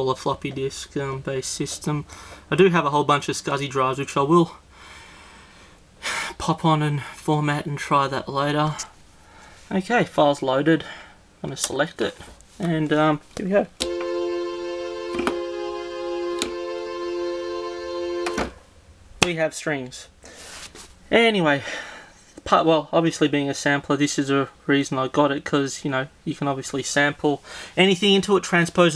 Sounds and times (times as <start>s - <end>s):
Speech: 0.0s - 4.6s, 6.3s - 9.0s, 9.7s - 13.8s, 19.2s - 20.2s, 21.1s - 21.7s, 22.4s - 28.9s
Keyboard (musical): 13.8s - 18.6s.